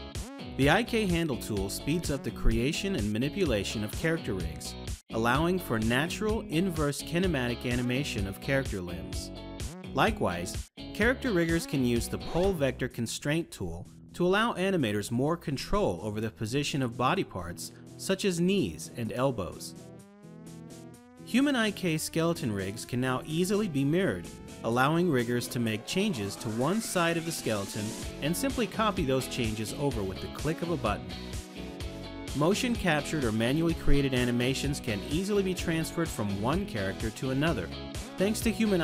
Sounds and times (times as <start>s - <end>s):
Music: 0.0s - 38.8s
Speech: 0.6s - 9.3s, 10.0s - 19.8s, 21.3s - 31.0s, 32.4s - 38.8s.